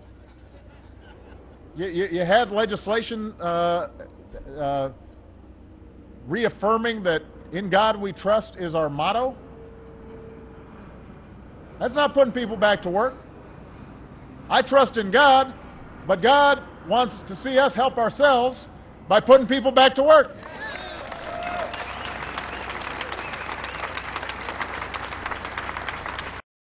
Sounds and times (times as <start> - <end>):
Narration, monologue: 1.4 - 20.4
Male speech, man speaking: 1.8 - 5.0, 6.3 - 9.4, 11.8 - 13.2, 14.5 - 20.4.